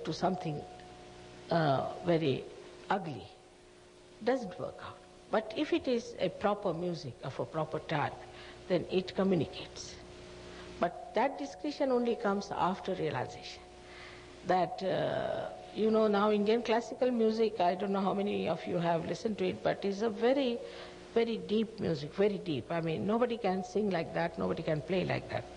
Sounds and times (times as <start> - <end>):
Speech: 0.0 - 0.7, 1.5 - 3.4, 4.2 - 10.0, 10.8 - 13.7, 14.5 - 20.6, 21.2 - 25.5.